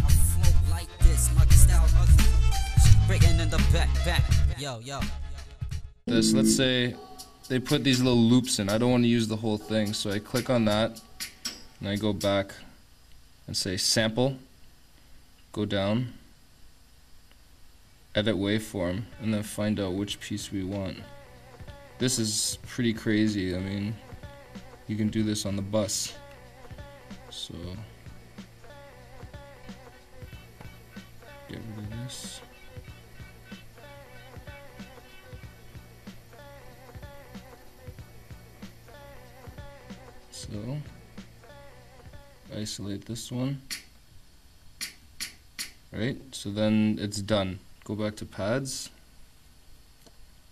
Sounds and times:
Music: 0.0 - 12.3, 19.1 - 42.8
Speech: 6.1 - 11.0, 11.8 - 12.8, 13.5 - 14.5, 15.5 - 16.3, 18.2 - 21.1, 22.0 - 24.0, 24.9 - 26.2, 27.3 - 27.9, 31.5 - 32.5, 40.3 - 40.9, 42.5 - 43.7, 45.9 - 49.0.

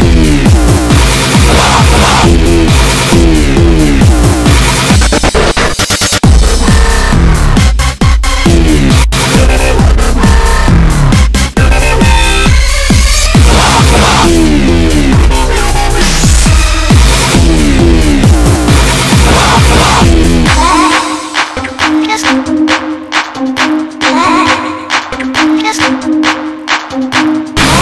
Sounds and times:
Dubstep: 0.0 - 27.8.

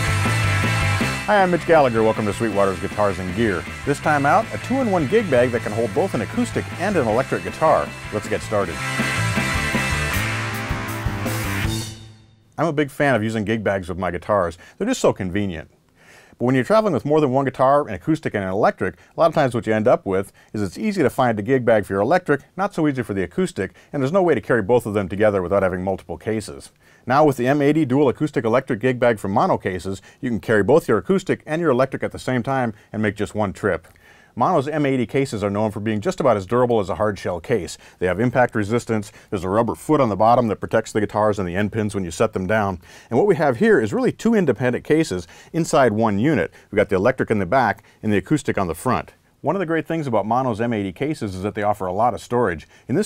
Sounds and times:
Speech: 1.3 - 8.8, 12.6 - 15.8, 16.4 - 53.0.

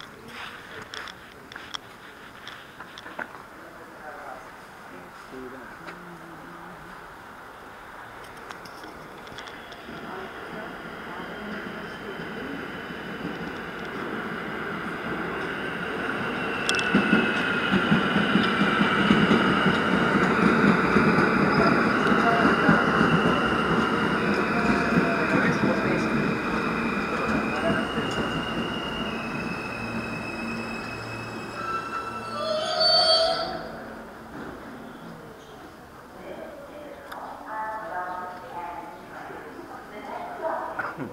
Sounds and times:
Train: 0.0 - 41.1.

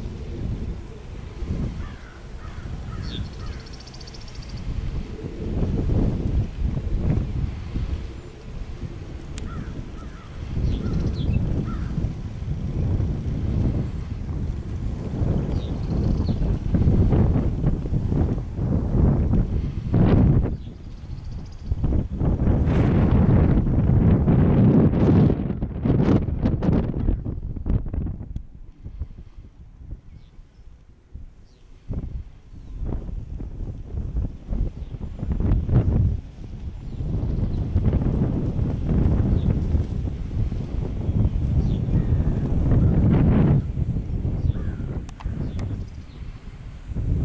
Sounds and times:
Outside, rural or natural: 0.0 - 47.2.

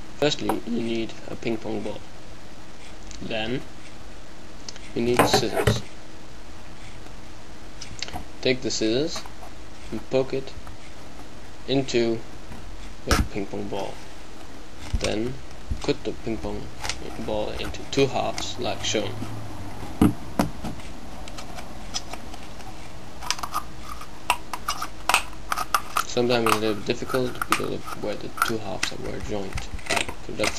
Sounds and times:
Speech: 0.2 - 2.0, 3.2 - 3.6, 4.9 - 5.8, 8.4 - 9.2, 9.9 - 10.6, 11.7 - 12.2, 13.1 - 14.0, 15.0 - 19.2, 26.0 - 30.5.

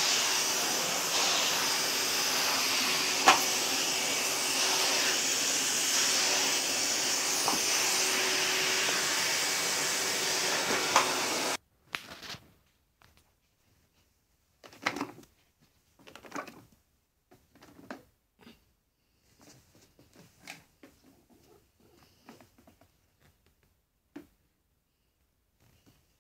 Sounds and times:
Vacuum cleaner: 0.0 - 11.6.

